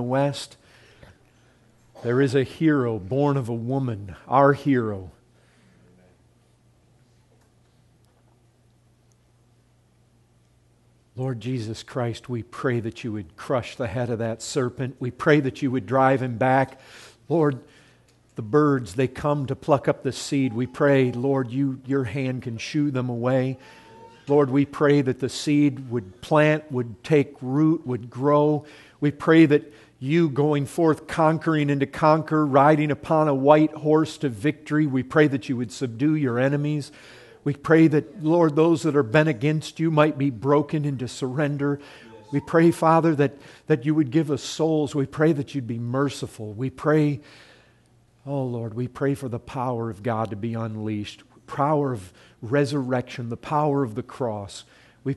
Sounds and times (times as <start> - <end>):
Speech: 0.0 - 0.6, 2.0 - 5.2, 11.2 - 17.7, 18.4 - 47.2, 48.2 - 55.1.